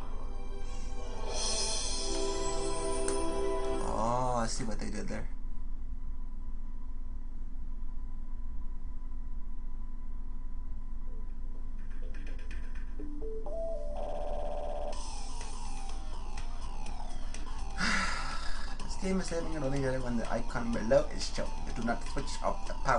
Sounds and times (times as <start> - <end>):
Music: 0.0 - 4.7, 11.8 - 22.9.